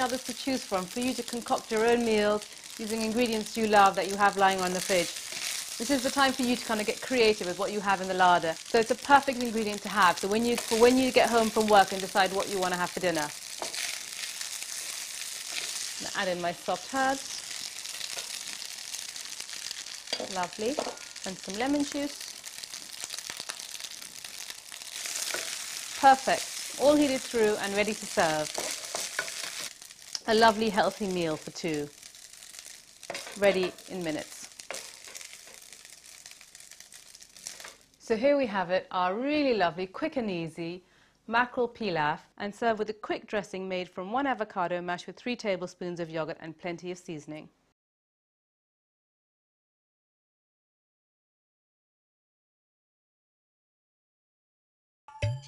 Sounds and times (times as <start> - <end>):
Speech: 5.8 - 13.3, 16.0 - 17.3, 20.2 - 22.2, 26.0 - 28.5, 30.2 - 31.9, 33.4 - 34.4, 38.1 - 47.5
Crumpling, crinkling: 34.2 - 38.0.